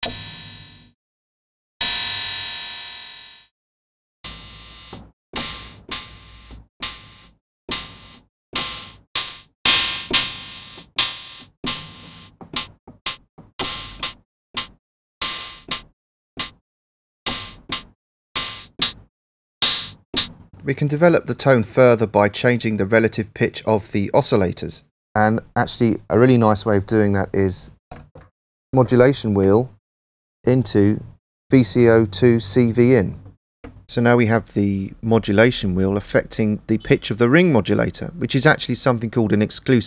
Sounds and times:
Speech: 20.6 - 27.8, 28.8 - 29.8, 30.5 - 33.3, 33.9 - 39.8.

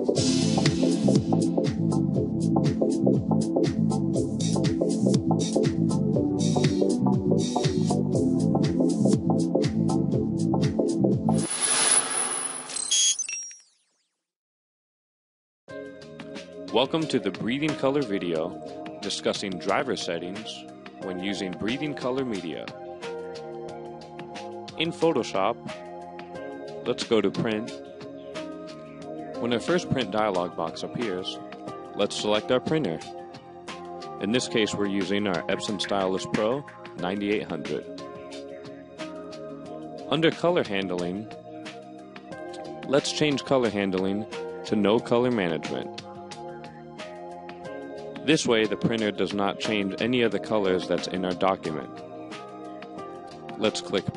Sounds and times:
Music: 0.0 - 13.1, 15.7 - 54.1
Speech: 16.7 - 22.8, 24.8 - 25.8, 26.9 - 27.8, 29.4 - 31.4, 32.0 - 33.1, 34.2 - 37.9, 40.1 - 41.3, 42.9 - 45.9, 48.3 - 51.9, 53.6 - 54.1.

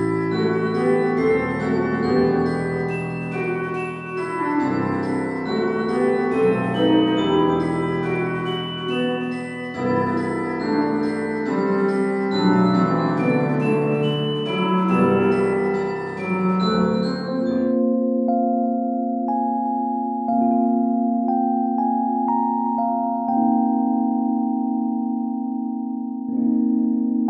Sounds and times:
Music: 0.0 - 27.3.

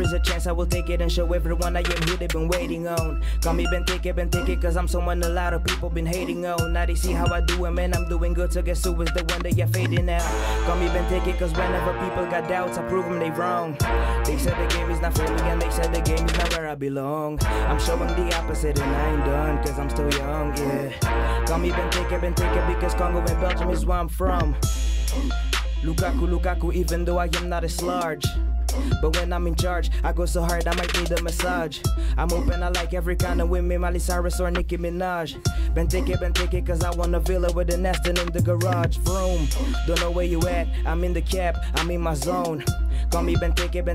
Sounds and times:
Music: 0.0 - 16.8, 17.4 - 43.9.

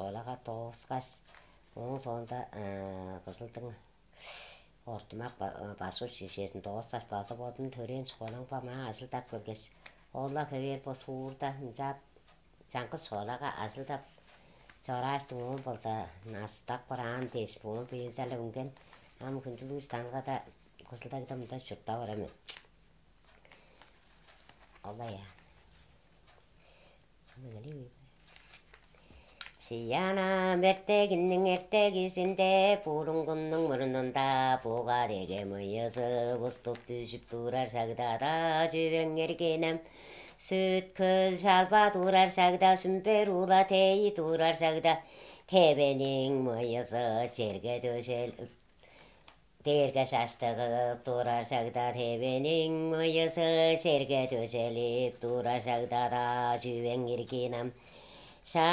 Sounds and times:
Inside, small room: 0.0 - 58.7.

